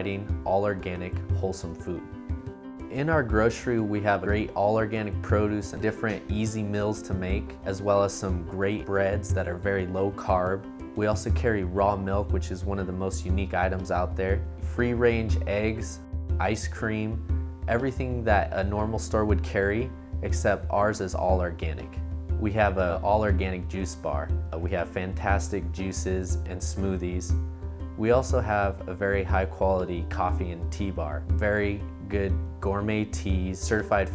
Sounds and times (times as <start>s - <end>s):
Speech: 0.0s - 2.0s, 2.9s - 27.4s, 28.0s - 34.1s
Music: 0.0s - 34.1s.